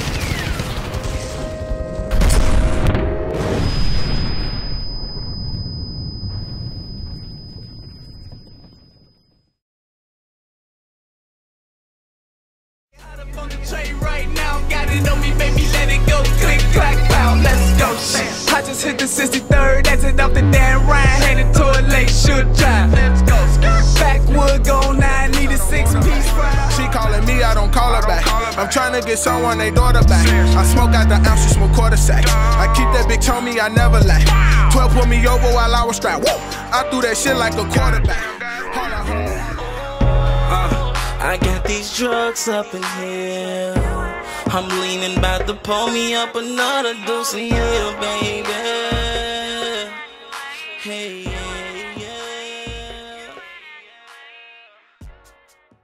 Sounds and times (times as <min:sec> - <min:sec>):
Music: 0:13.0 - 0:55.8.